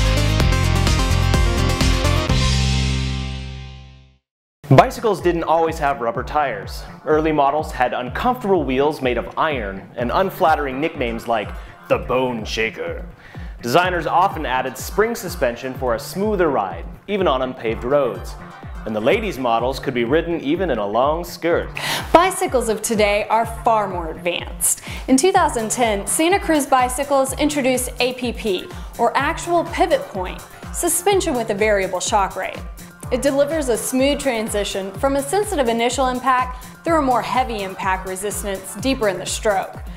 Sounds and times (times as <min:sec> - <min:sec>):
Music: 0:00.0 - 0:39.9
Speech: 0:04.7 - 0:13.0, 0:13.6 - 0:39.8.